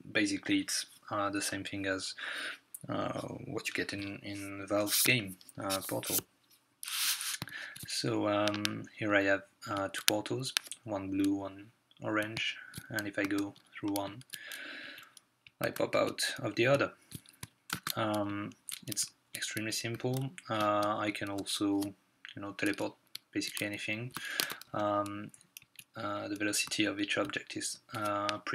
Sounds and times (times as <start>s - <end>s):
Speech: 0.0s - 2.2s, 2.8s - 6.2s, 7.9s - 14.2s, 15.6s - 17.0s, 17.9s - 25.3s, 26.0s - 28.5s.